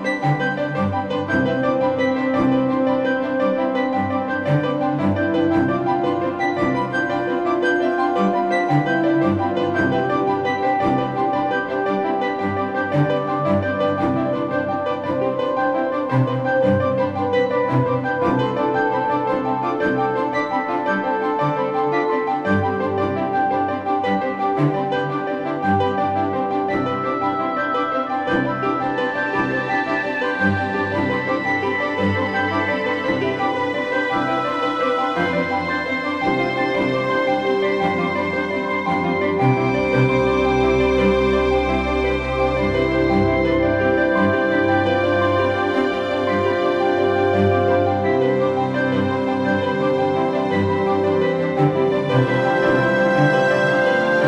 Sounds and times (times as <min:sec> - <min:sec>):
Music: 0:00.0 - 0:54.2.